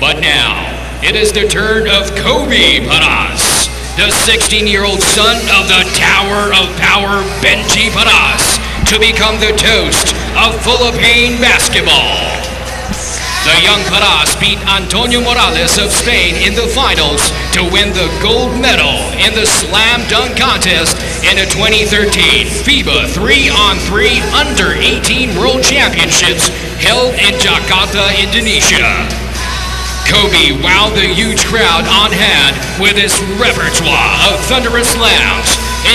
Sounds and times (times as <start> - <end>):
Speech: 0.0 - 12.5, 13.3 - 29.2, 30.0 - 35.9
Music: 0.0 - 35.9.